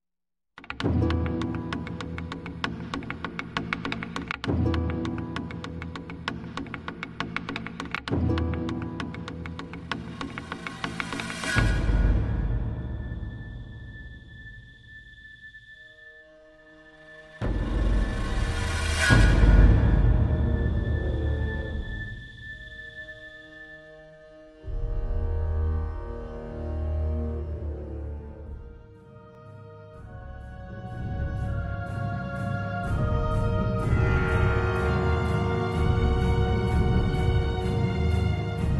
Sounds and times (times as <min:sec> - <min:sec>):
Music: 0:00.6 - 0:38.7.